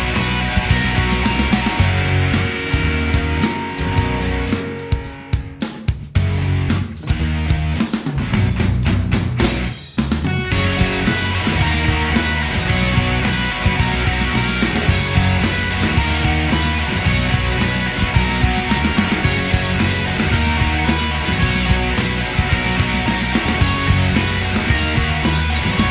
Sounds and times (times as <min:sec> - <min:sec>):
Music: 0:00.0 - 0:25.9.